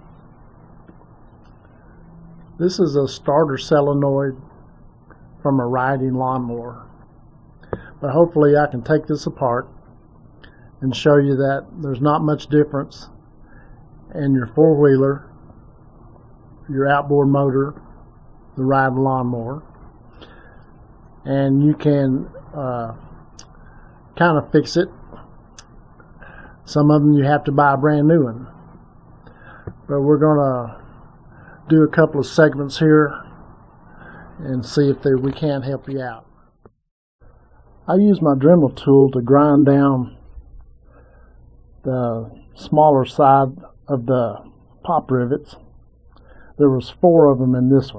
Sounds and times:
Speech: 2.6s - 4.5s, 5.4s - 7.0s, 7.8s - 9.8s, 10.8s - 13.2s, 14.1s - 15.3s, 16.6s - 17.9s, 18.6s - 19.7s, 21.2s - 23.1s, 24.2s - 25.2s, 26.3s - 28.6s, 29.8s - 30.9s, 31.6s - 33.3s, 34.3s - 36.4s, 37.8s - 40.3s, 41.8s - 45.7s, 46.6s - 47.9s.

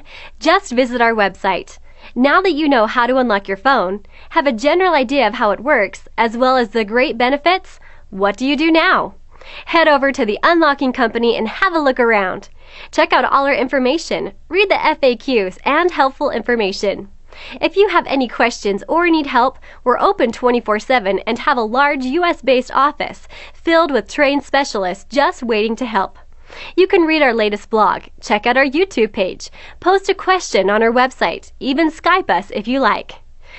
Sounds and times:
Narration, monologue: 0.0s - 33.5s.

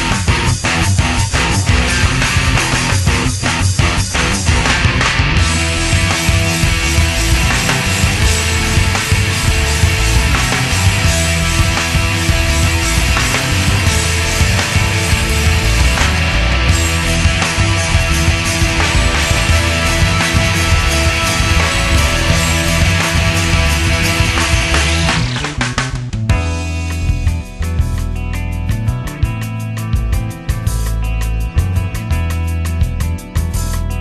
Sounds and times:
Techno: 0.0s - 28.1s.

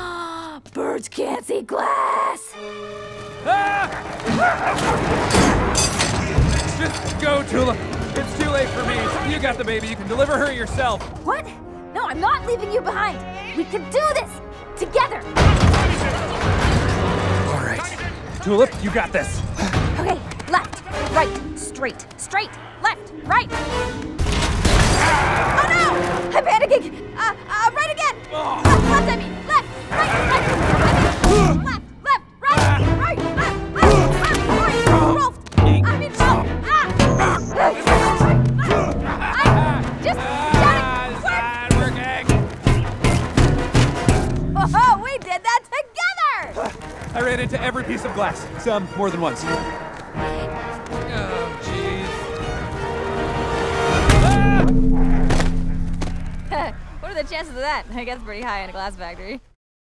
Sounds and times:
Music: 0.0s - 59.4s.

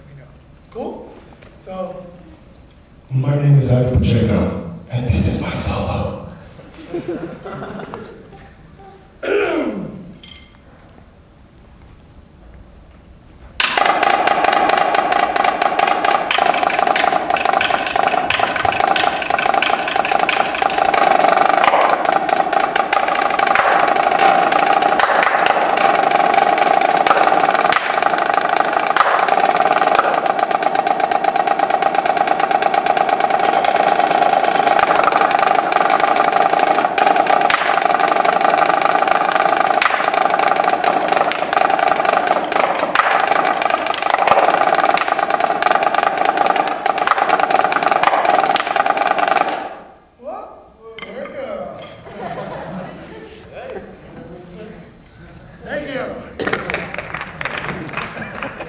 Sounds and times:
Speech: 3.1s - 6.3s.

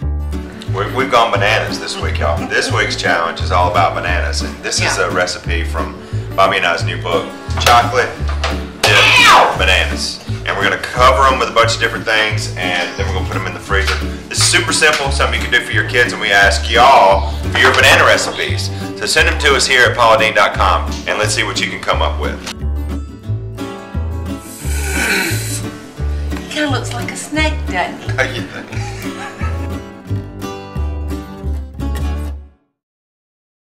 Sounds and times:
Music: 0.0s - 32.8s.

